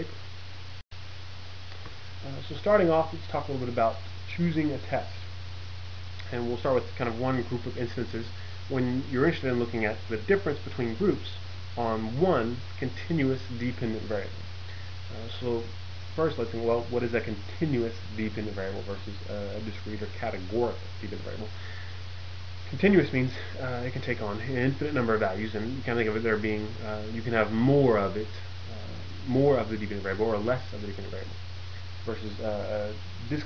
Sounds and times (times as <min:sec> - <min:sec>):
Narration, monologue: 0:00.0 - 0:33.4.